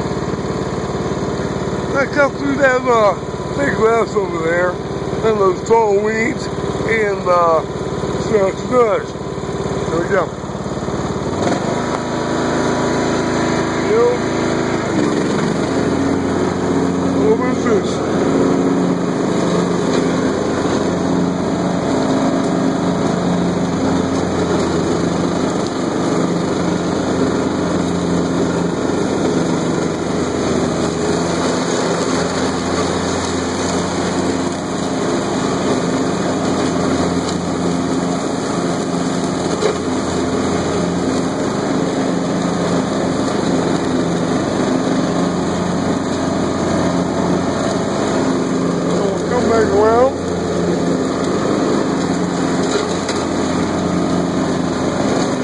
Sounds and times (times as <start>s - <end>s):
Speech: 1.9s - 9.2s, 9.9s - 10.4s, 13.8s - 14.2s, 17.1s - 18.1s, 48.9s - 50.2s.